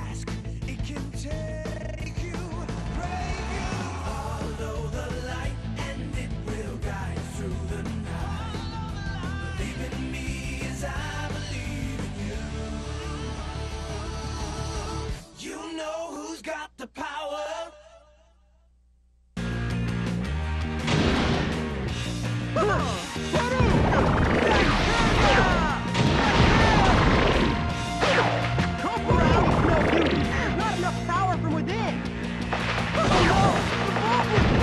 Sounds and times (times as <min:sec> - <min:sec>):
Music: 0:00.0 - 0:16.4, 0:19.4 - 0:34.6
Speech: 0:22.6 - 0:25.8, 0:28.8 - 0:32.0, 0:33.0 - 0:34.6.